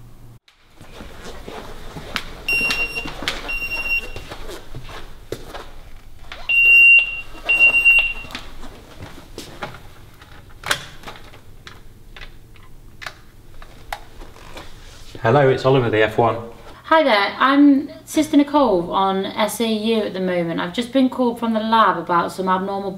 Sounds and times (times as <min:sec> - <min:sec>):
Smoke detector, smoke alarm: 0:02.5 - 0:04.4, 0:06.4 - 0:08.4.